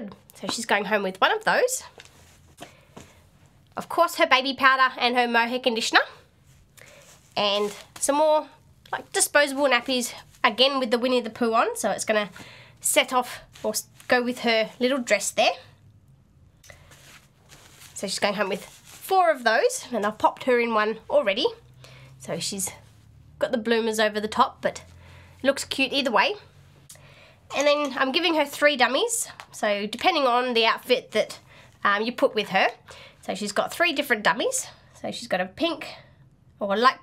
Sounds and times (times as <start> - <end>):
Speech: 0.0 - 1.9, 3.8 - 6.2, 7.4 - 15.7, 18.0 - 21.6, 22.2 - 22.8, 23.4 - 24.8, 25.4 - 26.5, 27.5 - 36.0, 36.6 - 37.0
Inside, small room: 0.0 - 37.0.